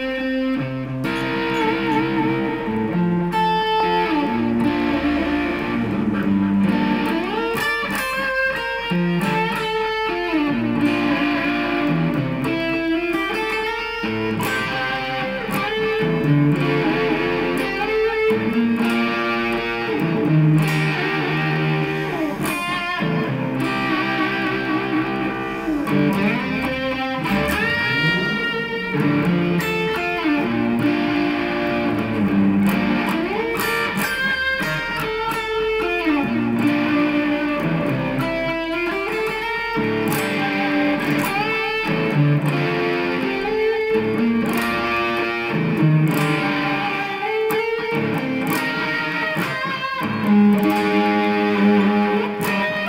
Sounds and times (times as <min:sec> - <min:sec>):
Strum: 0:00.0 - 0:52.8
Acoustic guitar: 0:14.2 - 0:35.5.